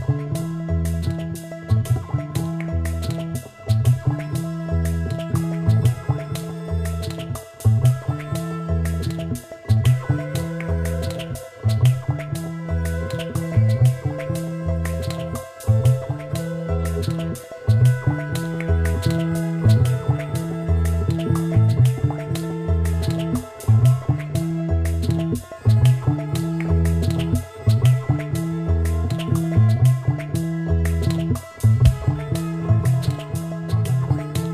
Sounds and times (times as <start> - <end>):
Music: 0.0 - 34.5.